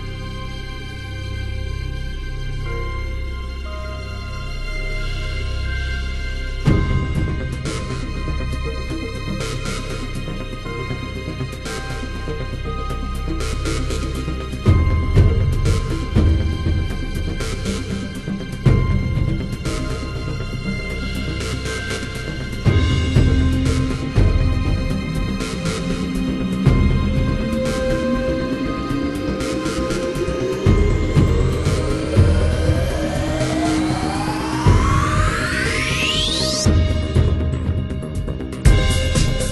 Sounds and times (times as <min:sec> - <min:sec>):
Music: 0:00.0 - 0:39.5.